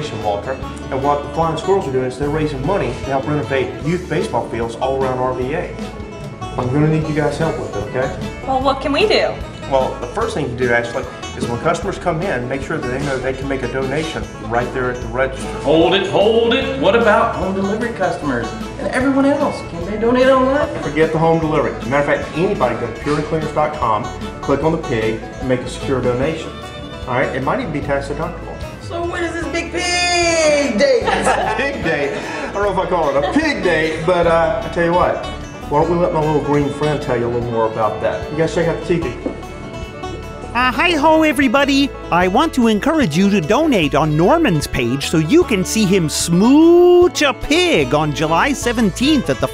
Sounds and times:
Music: 0:00.0 - 0:49.5.

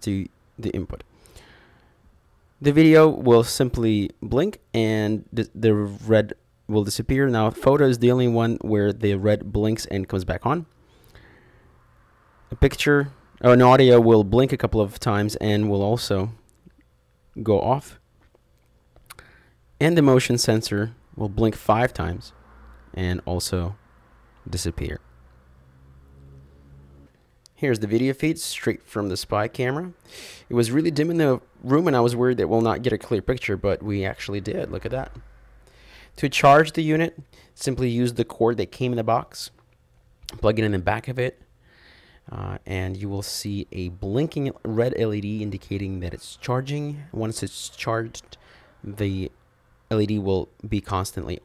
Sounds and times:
Speech: 0:00.0 - 0:01.1, 0:02.6 - 0:10.7, 0:12.5 - 0:16.4, 0:17.4 - 0:18.0, 0:19.8 - 0:23.8, 0:24.5 - 0:25.0, 0:27.6 - 0:35.2, 0:36.2 - 0:39.6, 0:40.3 - 0:41.4, 0:42.3 - 0:51.4.

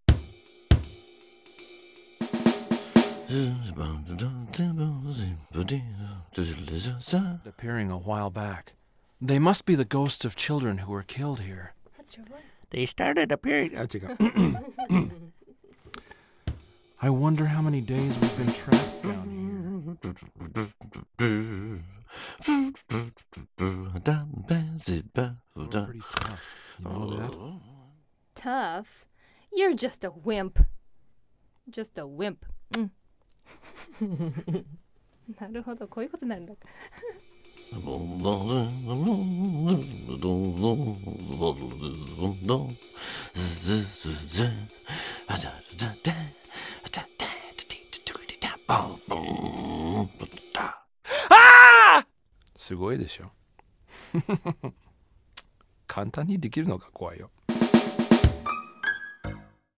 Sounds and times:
Music: 0:00.1 - 0:03.7, 0:16.0 - 0:19.5, 0:37.1 - 0:50.6, 0:57.5 - 0:59.7
Speech: 0:03.3 - 0:15.2, 0:17.0 - 0:19.8, 0:25.6 - 0:28.9, 0:37.8 - 0:42.8, 0:48.7 - 0:50.7, 0:52.6 - 0:53.3, 0:55.9 - 0:57.3.

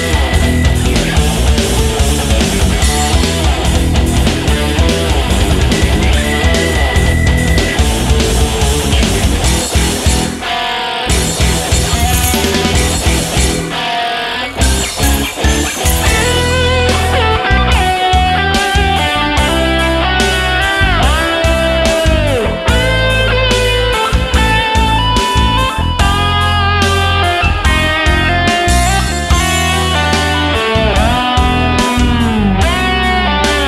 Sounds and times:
Guitar: 0:00.0 - 0:33.6.

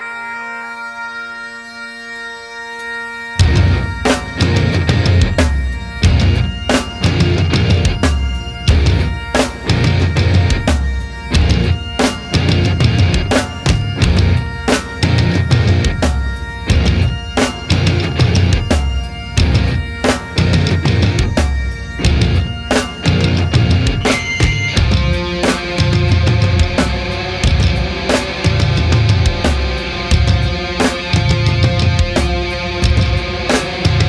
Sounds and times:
Music: 0:00.0 - 0:34.0.

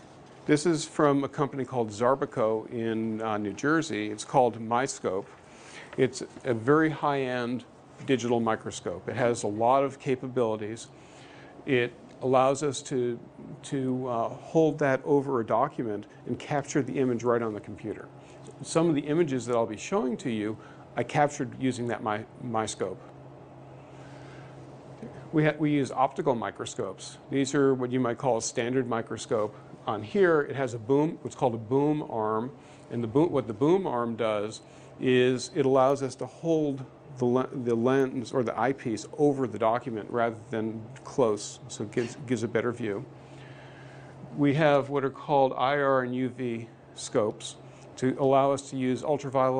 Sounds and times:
Speech: 0:00.5 - 0:05.3, 0:06.0 - 0:10.9, 0:11.7 - 0:23.1, 0:25.0 - 0:43.1, 0:44.3 - 0:49.5.

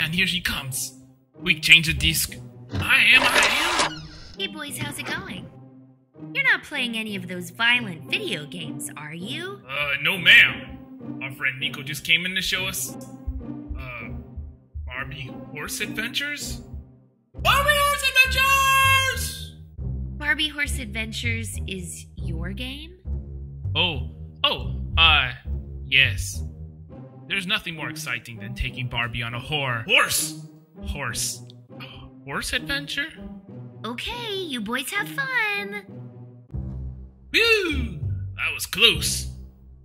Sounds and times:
Speech: 0:04.4 - 0:05.5, 0:13.8 - 0:14.2, 0:14.9 - 0:16.6, 0:17.5 - 0:19.5, 0:20.2 - 0:23.0, 0:23.8 - 0:26.4, 0:27.3 - 0:33.2, 0:33.9 - 0:35.8, 0:37.4 - 0:39.3.

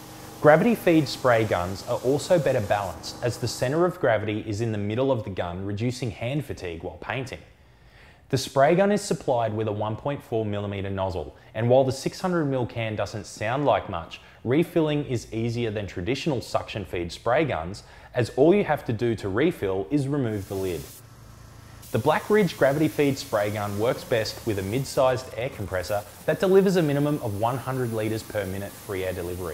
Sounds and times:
Spray: 0:00.0 - 0:04.0, 0:20.2 - 0:29.5
Speech: 0:00.4 - 0:07.5, 0:08.3 - 0:20.9, 0:21.9 - 0:29.5.

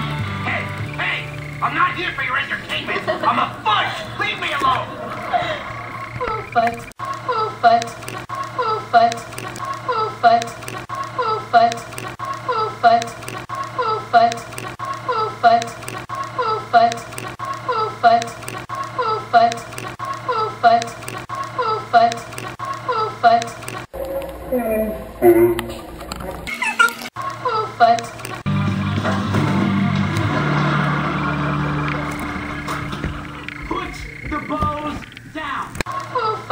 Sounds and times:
Music: 0:00.0 - 0:02.2, 0:28.5 - 0:33.6.

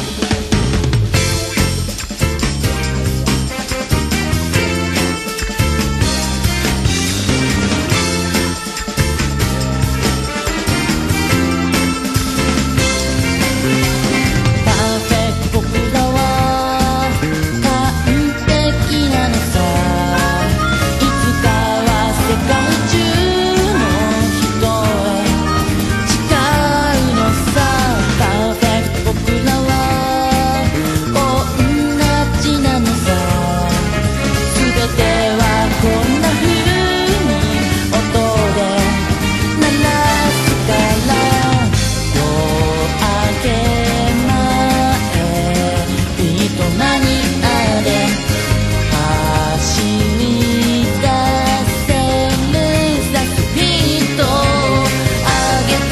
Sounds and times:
Exciting music: 0:00.0 - 0:55.9.

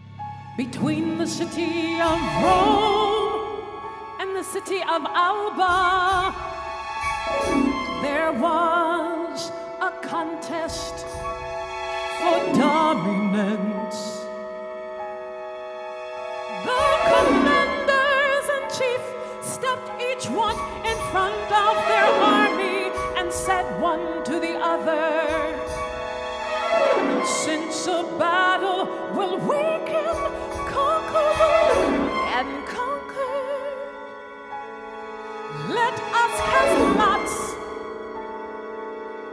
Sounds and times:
Music: 0:00.0 - 0:39.3.

